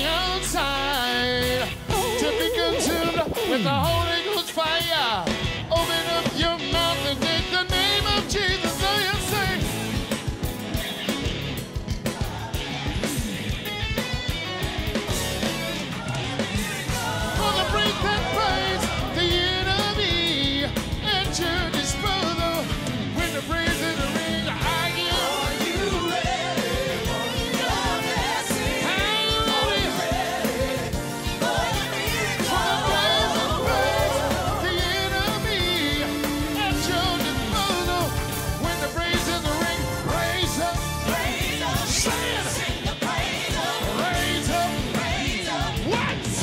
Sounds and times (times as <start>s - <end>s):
Music: 0.0s - 46.4s.